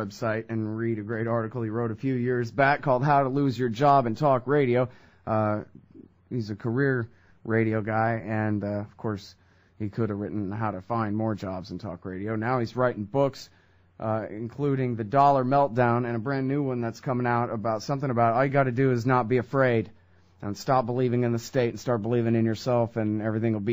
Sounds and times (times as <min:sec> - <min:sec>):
Speech: 0:00.0 - 0:23.7.